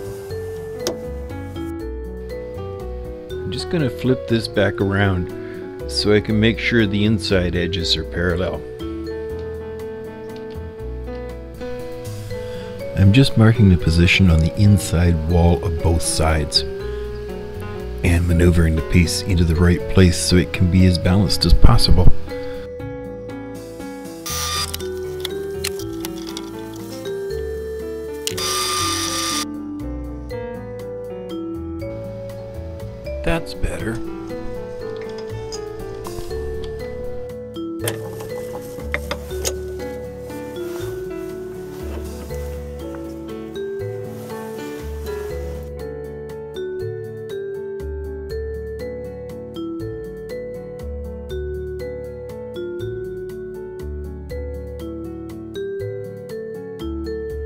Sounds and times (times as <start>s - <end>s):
Music: 0.0s - 57.4s
Speech: 3.4s - 5.3s, 5.9s - 8.6s, 13.0s - 16.7s, 18.0s - 22.2s, 33.2s - 34.1s.